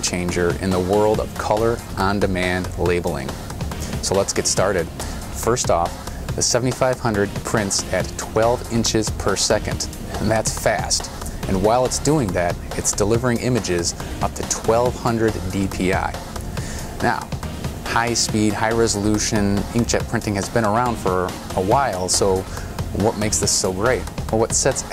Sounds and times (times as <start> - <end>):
Speech: 0.0 - 3.4, 4.0 - 16.2, 17.0 - 17.3, 17.9 - 24.9
Music: 0.0 - 24.9.